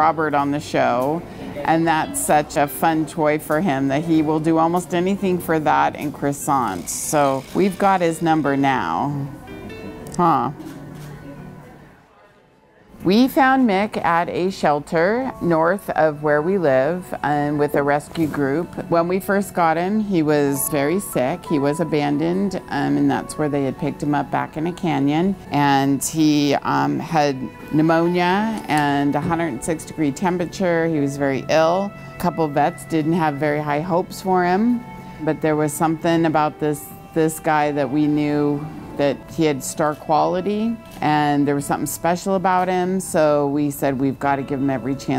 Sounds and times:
Music: 0.0 - 12.1, 13.0 - 45.1.

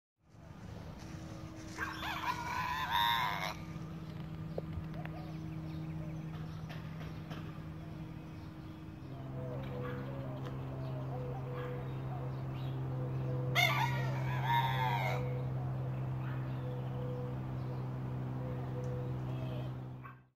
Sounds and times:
Crowing, cock-a-doodle-doo: 1.8 - 3.7, 13.6 - 15.4.

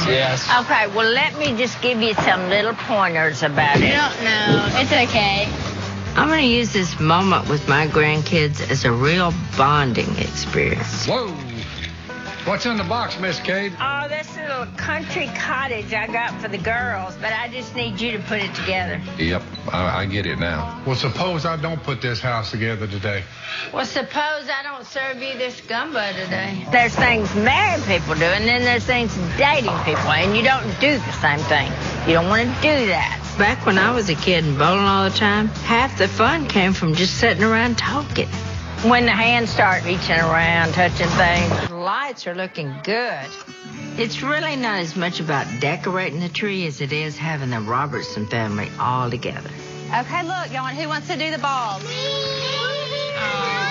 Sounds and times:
Music: 0.0 - 23.6, 24.7 - 53.7.

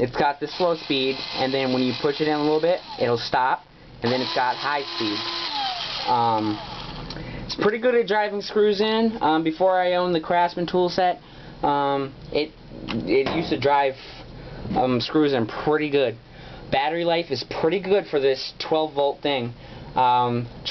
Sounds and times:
Speech: 0.0 - 5.2, 6.1 - 6.6, 7.5 - 20.7.

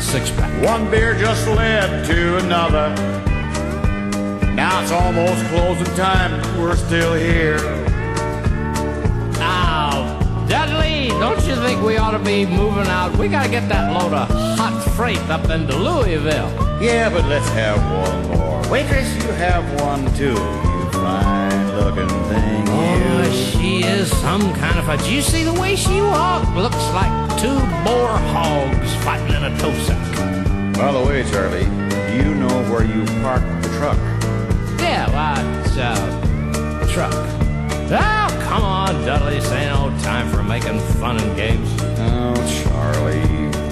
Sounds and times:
Music: 0.0 - 43.7.

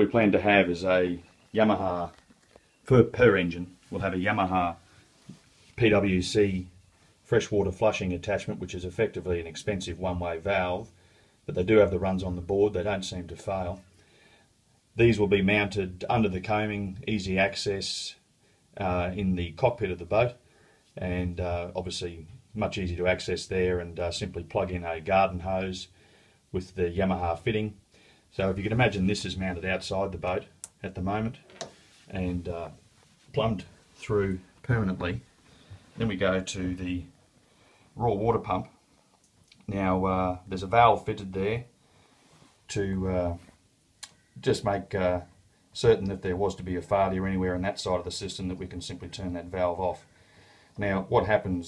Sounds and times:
Speech: 0.0 - 2.2, 2.8 - 4.9, 5.7 - 13.9, 15.0 - 20.4, 21.0 - 35.3, 36.0 - 37.2, 38.0 - 38.8, 39.5 - 41.8, 42.7 - 43.6, 44.4 - 50.1, 50.8 - 51.6.

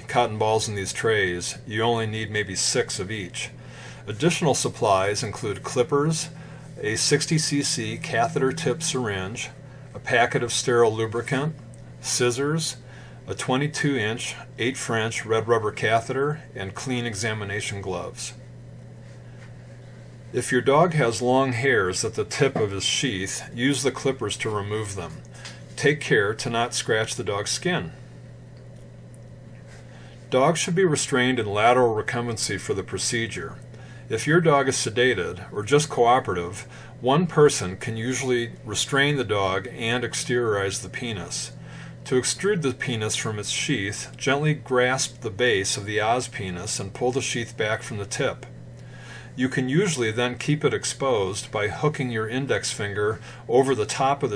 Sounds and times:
Speech: 0.0 - 18.4, 20.3 - 28.0, 30.3 - 48.5, 49.4 - 54.3.

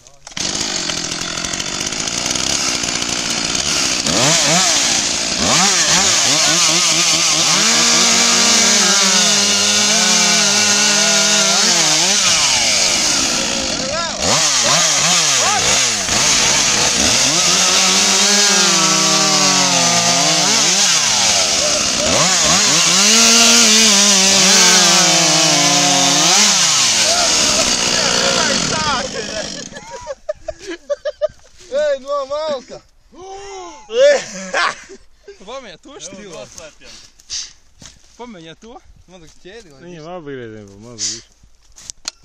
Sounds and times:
Chainsaw: 0.0 - 30.8
Power tool: 0.2 - 29.8.

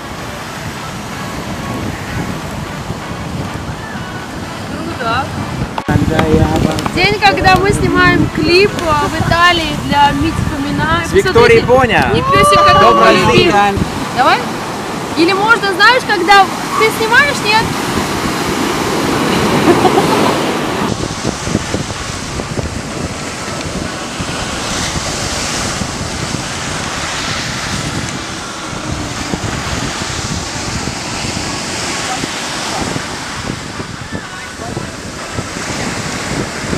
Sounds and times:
Outside, rural or natural: 0.0 - 36.7.

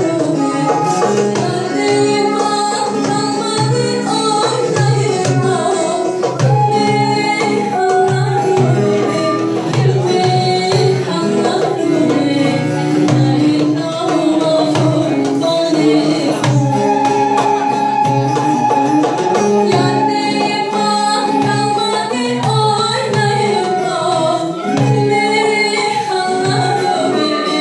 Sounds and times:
Blues: 0.0 - 27.6
Middle Eastern music: 0.0 - 27.6
Traditional music: 0.0 - 27.6.

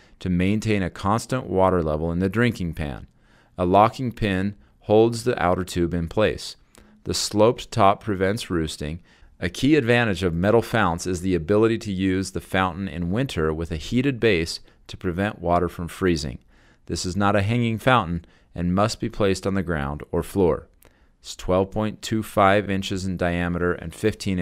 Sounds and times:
Speech: 0.2 - 24.4.

